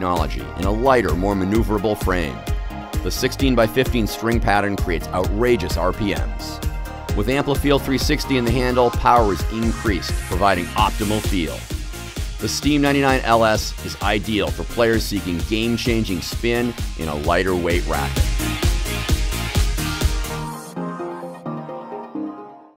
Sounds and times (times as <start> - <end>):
Speech: 0.0 - 2.4, 3.0 - 6.6, 7.2 - 11.6, 12.4 - 18.2
Music: 0.0 - 22.7.